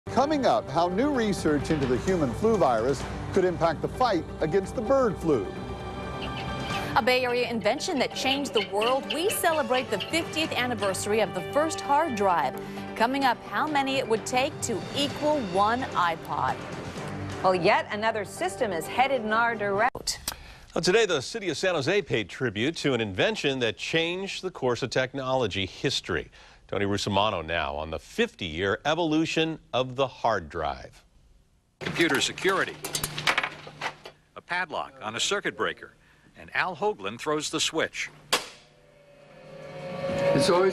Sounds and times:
Music: 0.1 - 20.0.

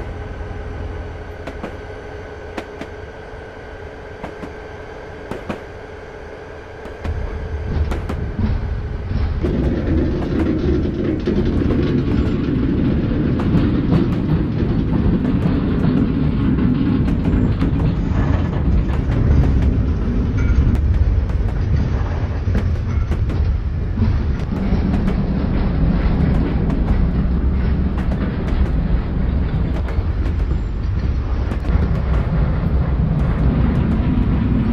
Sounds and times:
Outside, urban or manmade: 0.0 - 34.7
Railroad car, train wagon: 0.0 - 34.7
Train: 0.0 - 34.7.

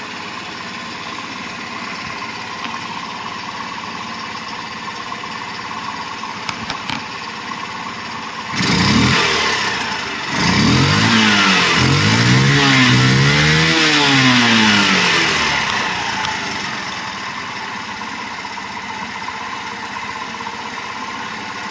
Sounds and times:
Idling: 0.0 - 21.7
Vehicle: 0.0 - 21.7
Accelerating, revving, vroom: 8.5 - 16.2.

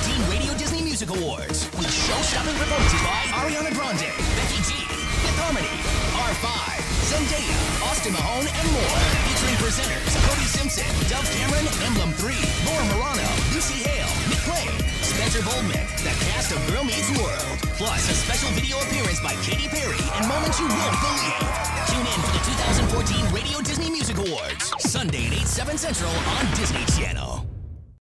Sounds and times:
Soundtrack music: 0.0 - 27.0
Speech: 0.0 - 27.5.

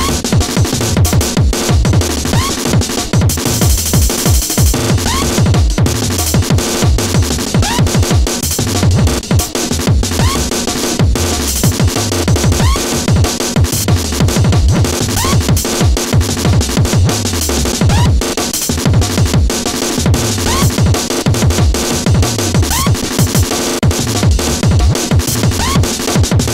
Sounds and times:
Music: 0.0 - 26.5.

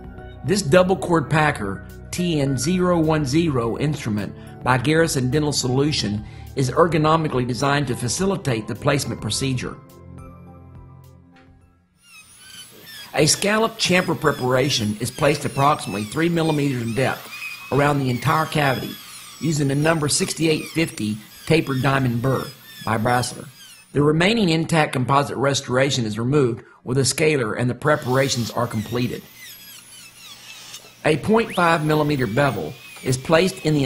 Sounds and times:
Music: 0.0 - 12.0
Speech: 0.5 - 9.8, 13.2 - 29.3, 31.0 - 33.8.

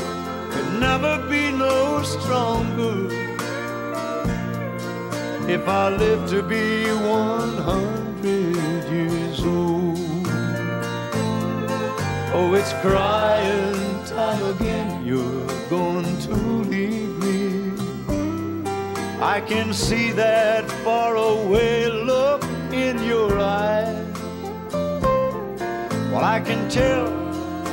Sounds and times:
Music: 0.0 - 27.7.

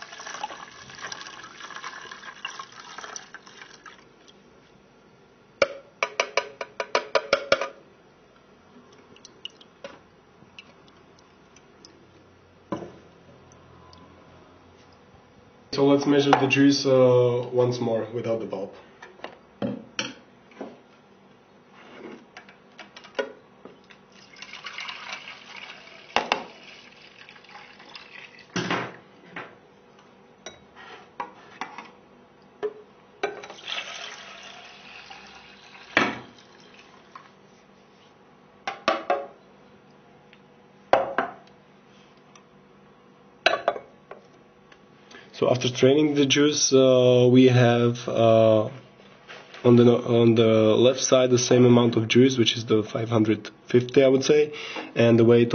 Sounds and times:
Speech: 15.7 - 18.8, 45.4 - 48.8, 49.6 - 55.5.

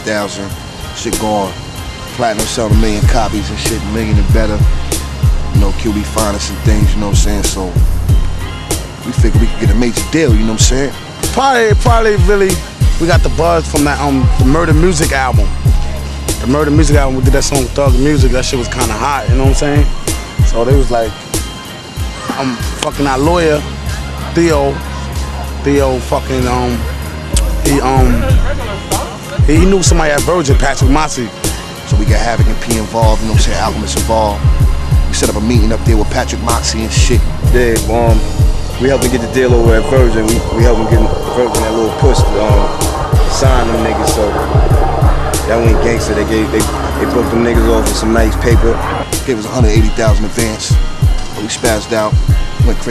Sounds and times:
Speech: 0.0 - 1.6, 2.2 - 4.7, 5.5 - 7.8, 9.0 - 15.5, 16.4 - 21.2, 22.3 - 23.7, 24.3 - 24.8, 25.6 - 31.3, 31.9 - 34.5, 35.1 - 44.7, 45.4 - 50.8, 51.4 - 52.9
Music: 0.0 - 52.9.

